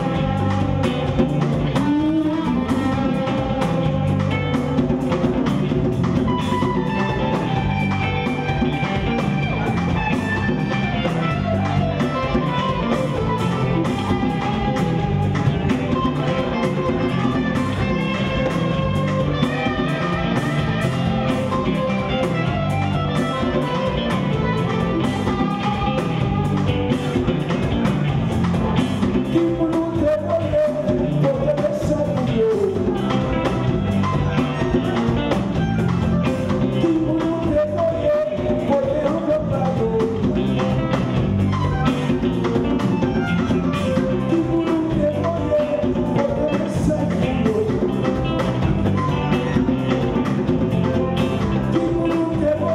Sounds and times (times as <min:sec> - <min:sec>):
Musical instrument: 0:00.0 - 0:52.7
Rock and roll: 0:00.0 - 0:52.7.